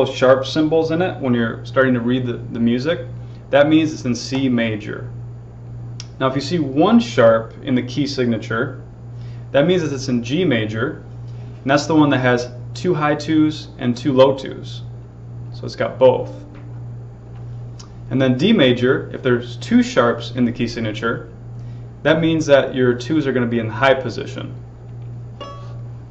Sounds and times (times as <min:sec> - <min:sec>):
Speech: 0:00.0 - 0:05.1, 0:06.0 - 0:08.8, 0:09.5 - 0:11.0, 0:11.6 - 0:14.9, 0:15.5 - 0:16.4, 0:18.1 - 0:21.3, 0:22.0 - 0:24.6.